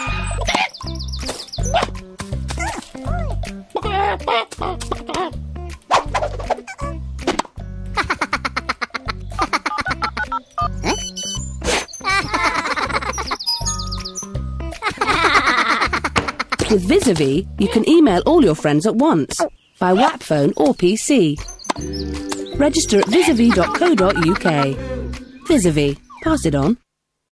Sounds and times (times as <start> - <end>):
Music: 0.0 - 19.1, 20.6 - 26.8
Speech: 16.6 - 21.4, 22.6 - 24.9, 25.5 - 26.8.